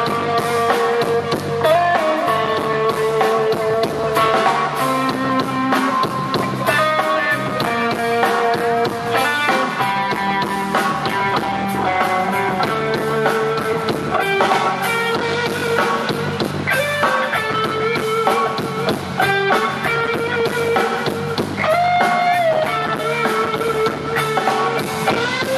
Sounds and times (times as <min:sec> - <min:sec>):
Electric guitar: 0:00.0 - 0:25.5.